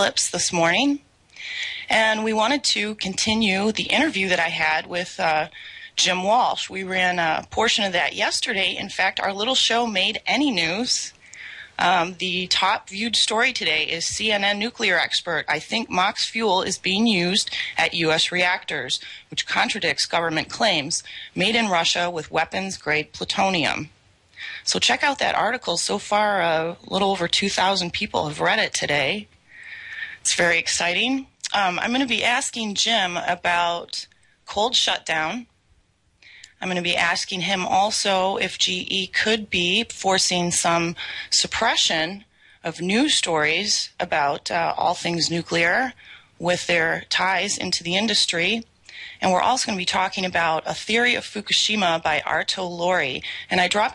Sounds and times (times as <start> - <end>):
Speech: 0.0 - 29.3, 30.0 - 35.5, 36.3 - 53.9.